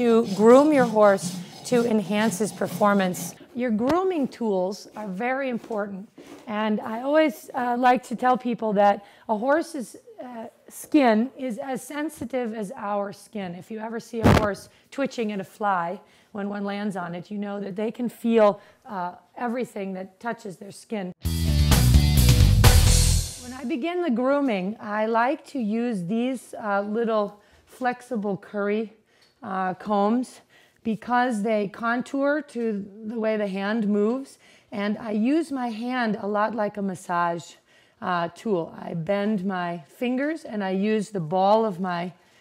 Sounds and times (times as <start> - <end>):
Speech: 0.0 - 21.2, 23.4 - 42.2.